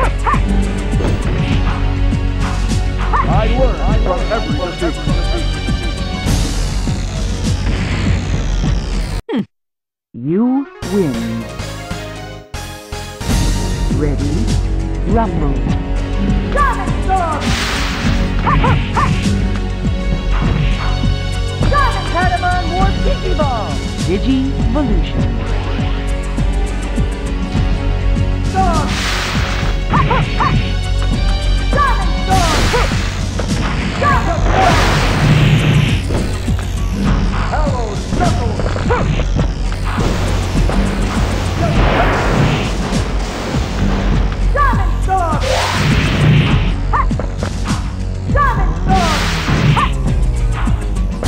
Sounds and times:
Music: 0.0s - 9.2s, 10.2s - 51.2s.

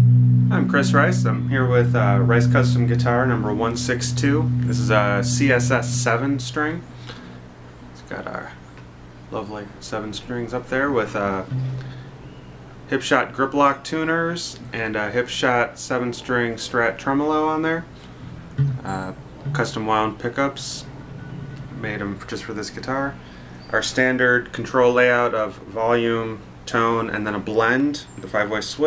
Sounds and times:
Speech: 0.5s - 6.9s, 8.0s - 8.6s, 9.3s - 11.6s, 12.9s - 17.9s, 18.8s - 20.9s, 21.8s - 28.8s.

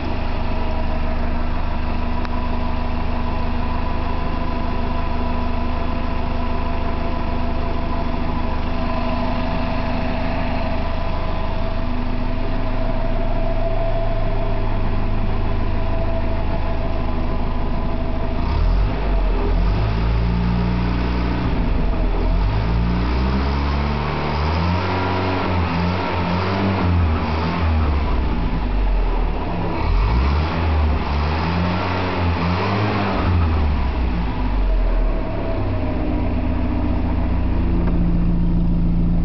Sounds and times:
Car: 0.0s - 39.2s
Heavy engine (low frequency): 0.0s - 39.2s.

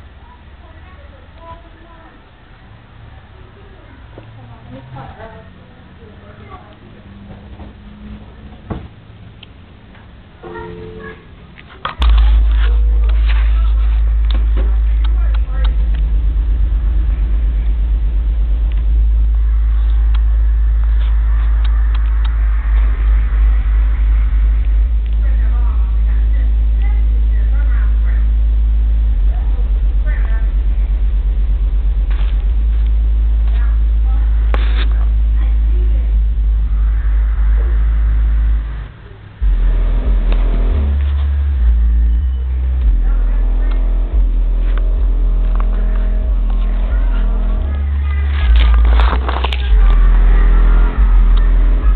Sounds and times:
Speech: 0.2s - 7.3s, 10.4s - 16.0s, 25.1s - 28.4s, 29.2s - 31.0s, 33.5s - 37.9s, 42.8s - 51.9s.

